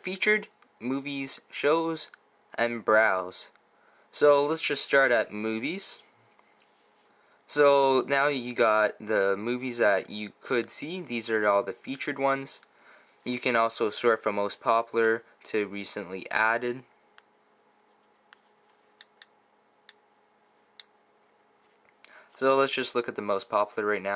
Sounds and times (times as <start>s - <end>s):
Speech: 0.0s - 3.6s, 4.2s - 6.1s, 7.5s - 16.9s, 22.4s - 24.1s.